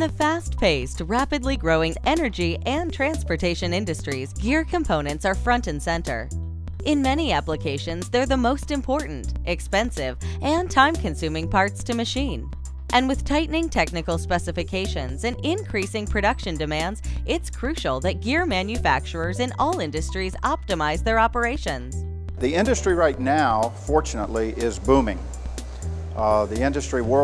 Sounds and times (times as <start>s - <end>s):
Speech: 0.0s - 6.3s, 6.9s - 21.8s, 22.4s - 25.2s, 26.2s - 27.2s
Music: 0.0s - 27.2s.